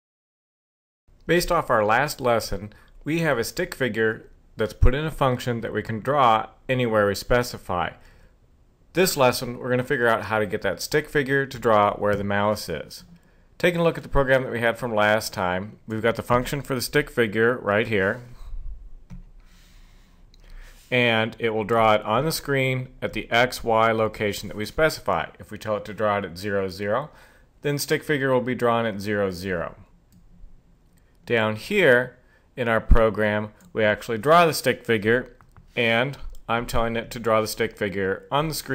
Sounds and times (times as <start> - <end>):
Speech: 1.3 - 8.0, 9.0 - 18.4, 20.9 - 29.9, 31.3 - 38.7.